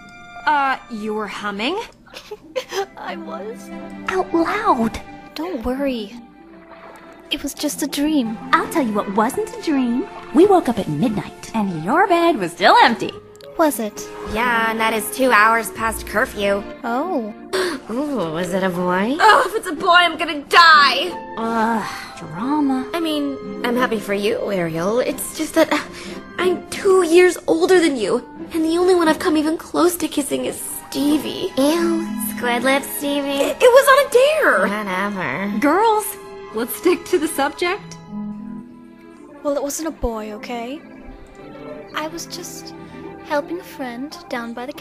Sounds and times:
Background music: 0:00.0 - 0:44.8.

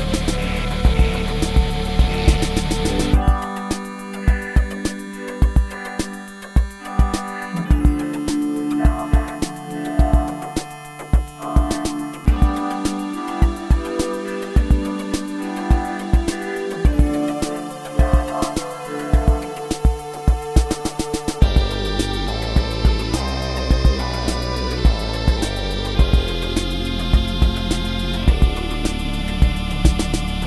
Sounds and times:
Synthesizer: 0:00.0 - 0:30.4.

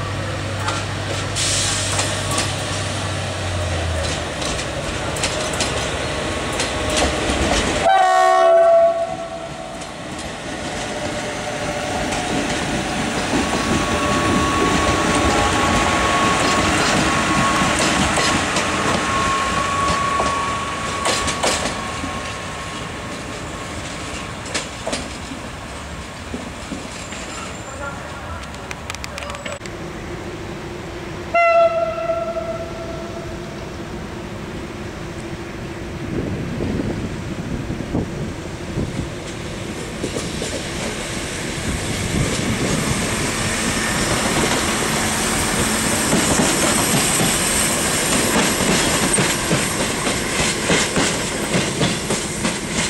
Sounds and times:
Railroad car, train wagon: 0:00.0 - 0:52.8
Clickety-clack: 0:03.9 - 0:05.9, 0:06.5 - 0:07.8, 0:12.0 - 0:21.8, 0:23.8 - 0:25.4, 0:39.8 - 0:41.1, 0:45.6 - 0:52.8
Train horn: 0:07.8 - 0:09.8, 0:31.3 - 0:33.6.

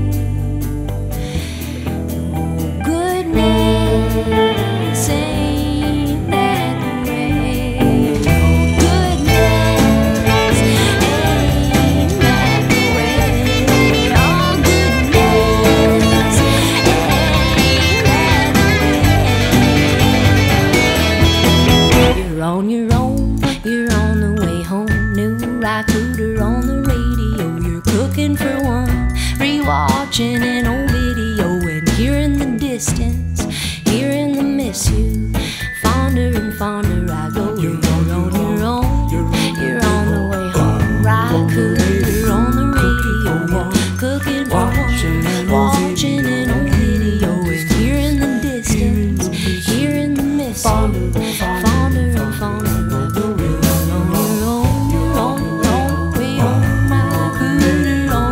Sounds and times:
Happy music: 0:00.0 - 0:58.3.

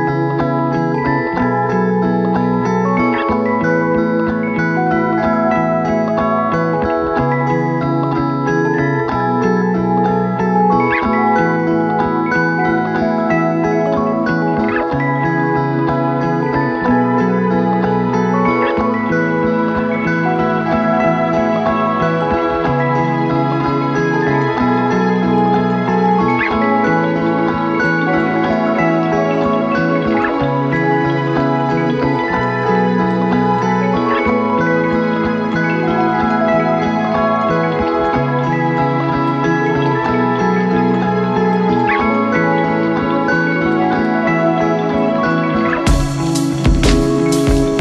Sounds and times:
Glockenspiel: 0:00.0 - 0:47.8
Marimba, xylophone: 0:00.0 - 0:47.8.

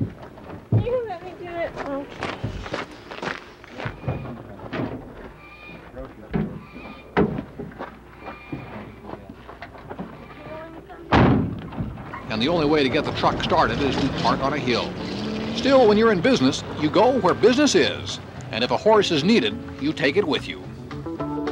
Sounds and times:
Animal: 0:03.8 - 0:04.5, 0:05.3 - 0:07.2, 0:08.2 - 0:09.2, 0:10.0 - 0:10.8.

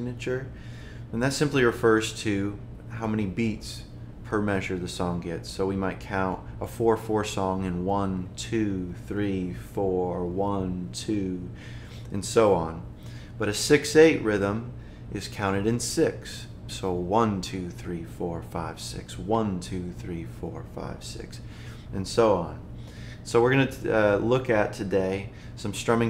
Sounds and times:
Speech: 0:00.0 - 0:00.5, 0:01.1 - 0:26.1.

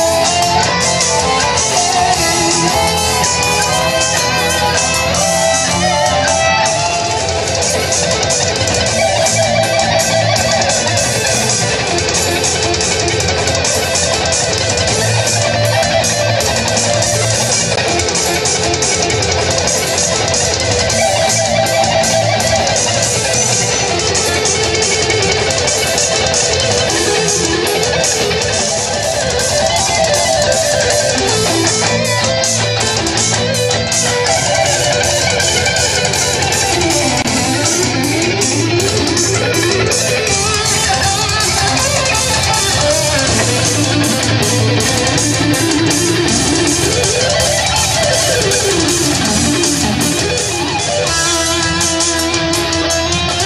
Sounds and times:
Sampler: 0:00.0 - 0:53.4.

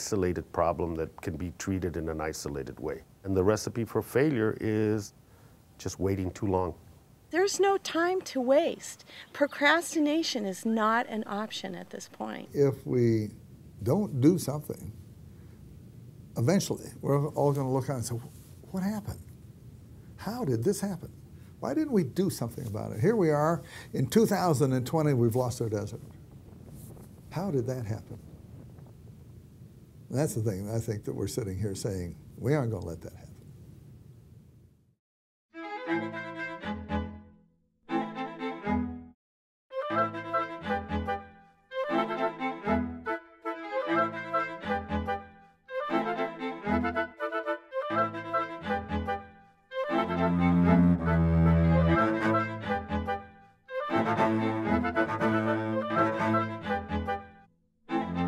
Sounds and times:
Music: 0:35.5 - 0:58.2.

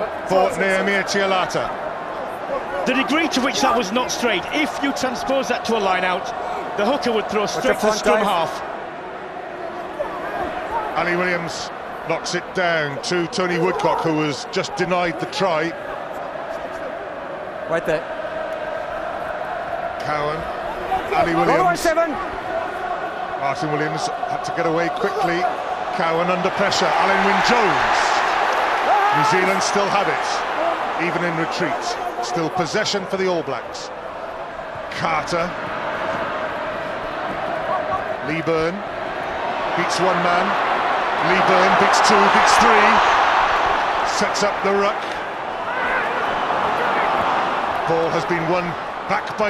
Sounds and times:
Speech: 0:02.8 - 0:08.6, 0:11.0 - 0:15.8, 0:21.1 - 0:22.2, 0:23.4 - 0:28.2, 0:29.1 - 0:30.4, 0:31.0 - 0:33.9, 0:39.8 - 0:40.6, 0:41.2 - 0:43.0, 0:44.1 - 0:45.1, 0:47.9 - 0:49.5.

